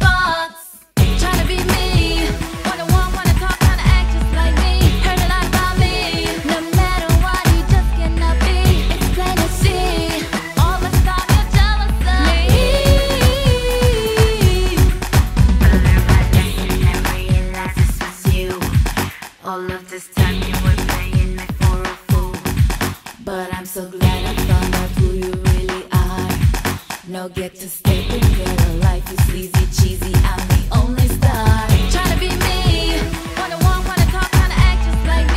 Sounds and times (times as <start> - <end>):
Disco: 0.0 - 19.5, 20.1 - 35.3.